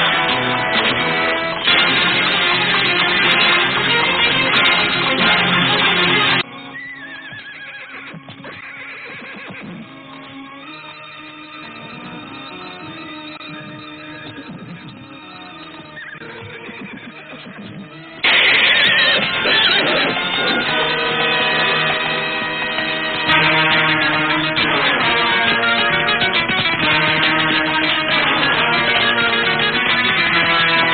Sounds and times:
Music: 0.0s - 30.9s.

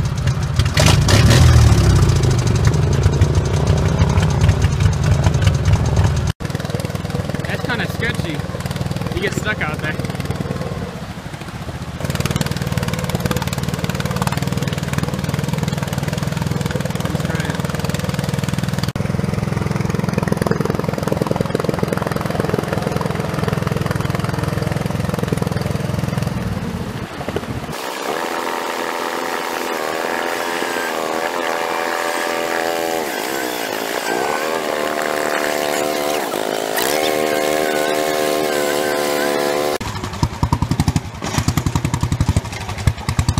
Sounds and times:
Vehicle: 0.0s - 43.3s.

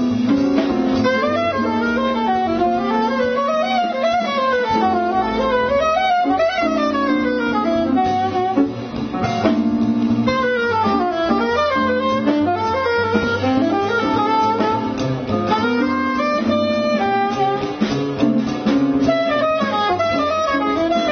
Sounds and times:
Jazz: 0.0s - 21.1s.

